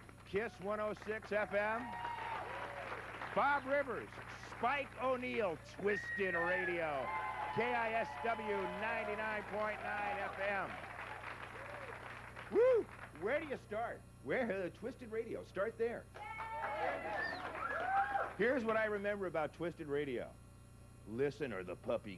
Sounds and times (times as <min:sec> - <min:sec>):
Speech: 0:00.3 - 0:01.9, 0:03.4 - 0:10.8, 0:13.2 - 0:16.1, 0:18.4 - 0:20.4, 0:21.1 - 0:22.1.